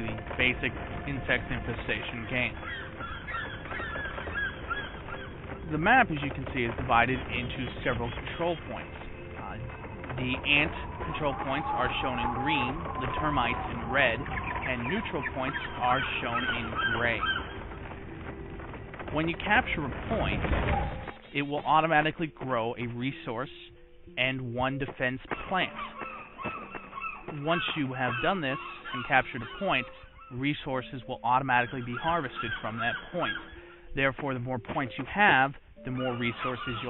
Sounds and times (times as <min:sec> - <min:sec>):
Speech: 0:00.0 - 0:02.6, 0:05.7 - 0:17.3, 0:19.1 - 0:20.4, 0:21.3 - 0:25.8, 0:27.3 - 0:33.4, 0:34.0 - 0:36.9
Animal: 0:00.0 - 0:22.7, 0:25.0 - 0:33.8, 0:34.7 - 0:36.9
Music: 0:00.0 - 0:36.9.